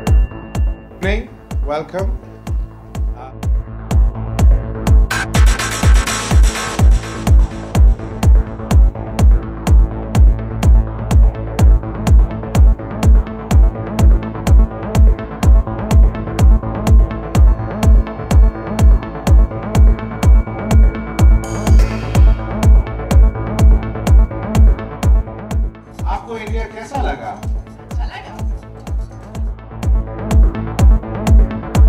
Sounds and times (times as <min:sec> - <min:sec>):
Music: 0:00.0 - 0:31.8
Speech: 0:26.0 - 0:29.2.